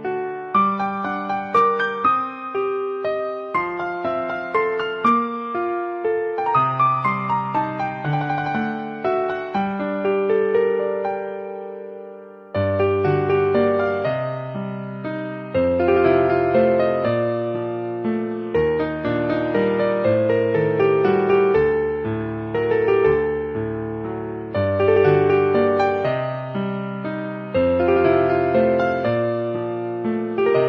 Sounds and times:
Music: 0:00.0 - 0:30.6.

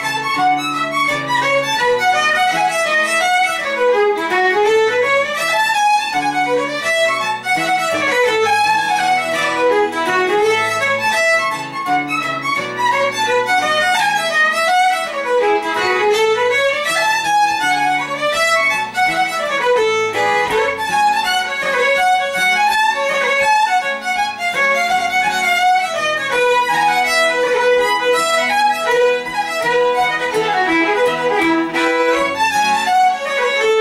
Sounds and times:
Acoustic guitar: 0:00.0 - 0:33.8.

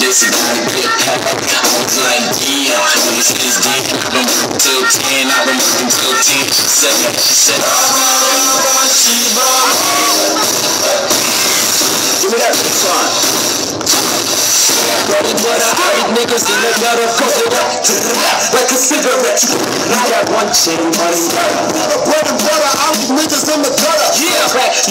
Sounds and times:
Techno: 0:00.0 - 0:24.9.

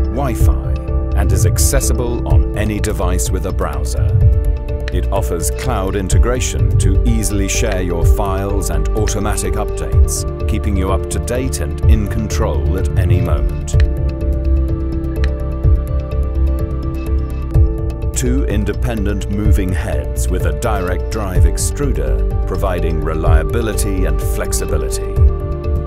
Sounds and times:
Music: 0:00.0 - 0:25.8
Speech: 0:00.1 - 0:04.2, 0:04.9 - 0:13.8, 0:18.2 - 0:25.2.

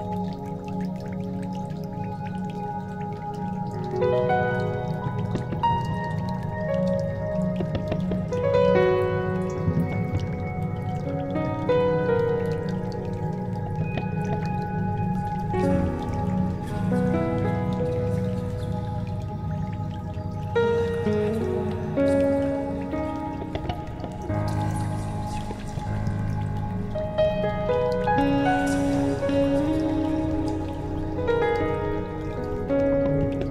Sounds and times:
Music: 0:00.0 - 0:33.5.

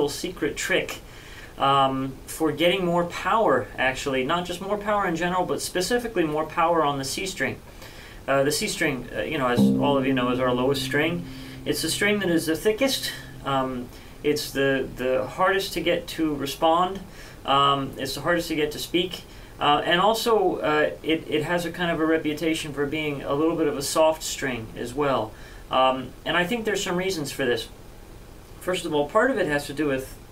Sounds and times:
Speech: 0:00.0 - 0:07.6, 0:08.3 - 0:27.8, 0:28.6 - 0:30.3
Musical instrument: 0:09.6 - 0:15.1.

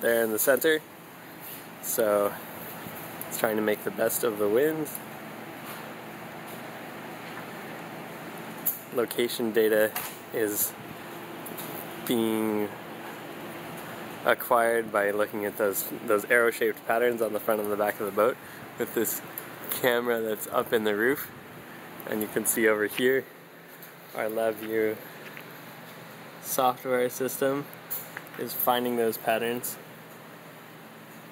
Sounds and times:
Speech: 0:00.0 - 0:00.9, 0:01.8 - 0:02.4, 0:03.3 - 0:05.0, 0:08.9 - 0:10.8, 0:12.1 - 0:12.8, 0:14.2 - 0:21.3, 0:22.0 - 0:23.3, 0:24.2 - 0:25.0, 0:26.4 - 0:27.7, 0:28.4 - 0:29.8.

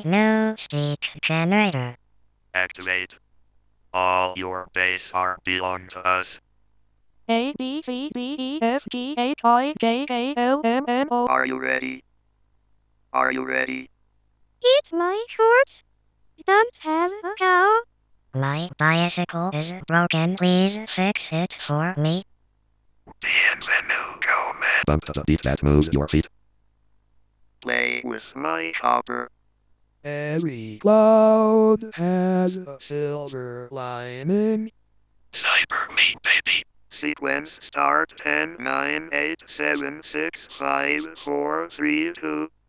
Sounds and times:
Speech: 0:02.6 - 0:03.2, 0:04.0 - 0:06.4, 0:11.3 - 0:12.0, 0:13.2 - 0:13.9, 0:14.6 - 0:15.8, 0:18.4 - 0:22.2, 0:23.2 - 0:26.3, 0:27.6 - 0:29.3, 0:30.1 - 0:34.7, 0:35.4 - 0:42.5.

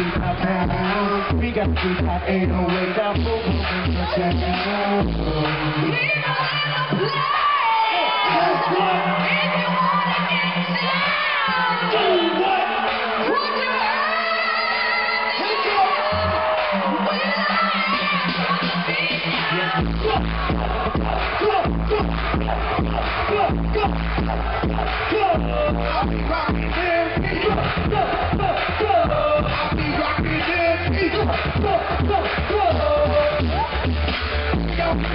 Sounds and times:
Music: 0:00.0 - 0:35.1
Female singing: 0:05.6 - 0:12.4, 0:13.2 - 0:16.2, 0:16.8 - 0:20.5.

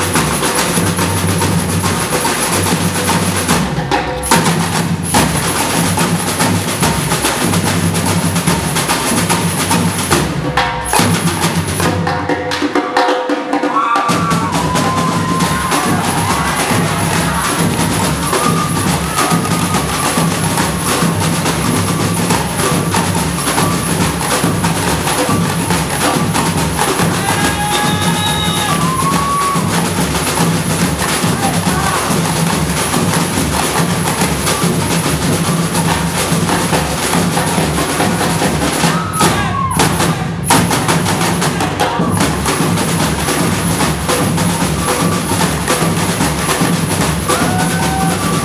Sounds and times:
Percussion: 0:00.0 - 0:48.4.

